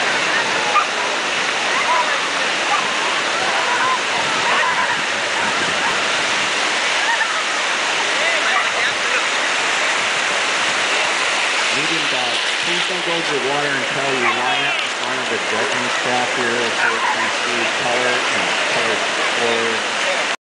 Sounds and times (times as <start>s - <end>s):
Bow-wow: 0.7s - 1.0s, 14.1s - 14.7s, 16.8s - 17.2s
Speech: 11.7s - 20.4s.